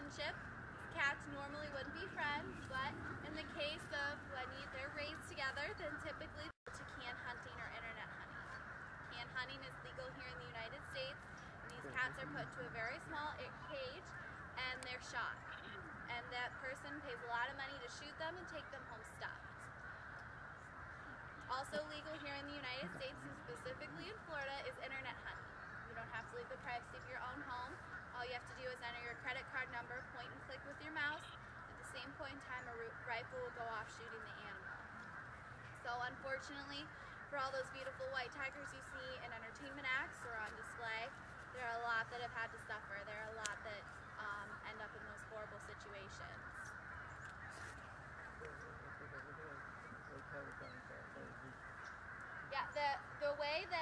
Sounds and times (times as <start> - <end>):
Speech: 0.0 - 8.6, 9.2 - 19.6, 21.5 - 34.9, 35.9 - 46.4, 48.3 - 51.6, 52.5 - 53.8.